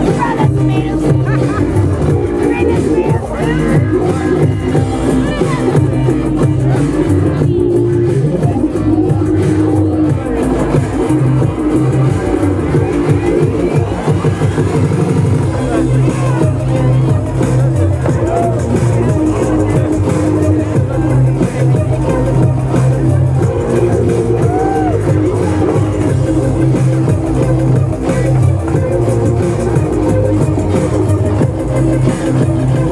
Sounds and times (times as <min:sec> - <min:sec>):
Music: 0:00.0 - 0:32.9.